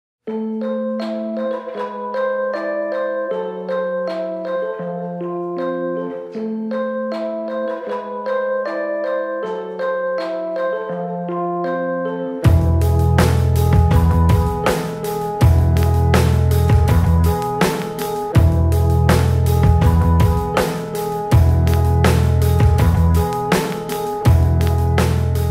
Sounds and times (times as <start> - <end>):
Marimba, xylophone: 0.3 - 25.5
Vibraphone: 0.4 - 25.5.